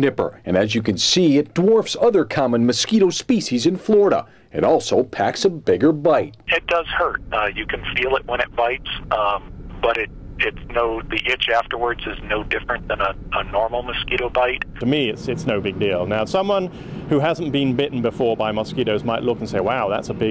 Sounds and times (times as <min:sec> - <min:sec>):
Speech: 0:00.0 - 0:20.3.